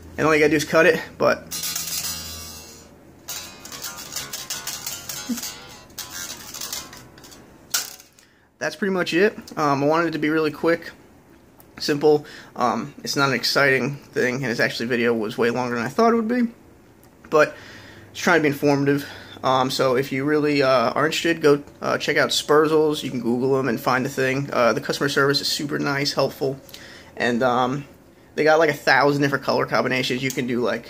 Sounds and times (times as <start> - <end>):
Guitar: 0.0 - 16.2
Inside, small room: 0.0 - 30.8
Speech: 0.2 - 1.5, 8.6 - 11.0, 11.8 - 16.6, 17.3 - 17.6, 18.2 - 26.6, 27.2 - 30.8.